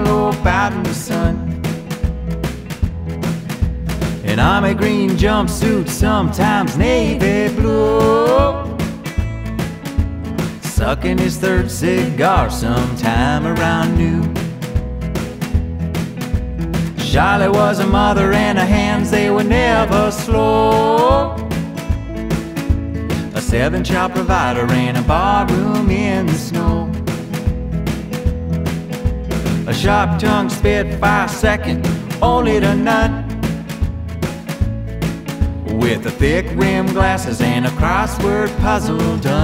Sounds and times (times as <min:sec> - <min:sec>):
Funny music: 0:00.0 - 0:39.4.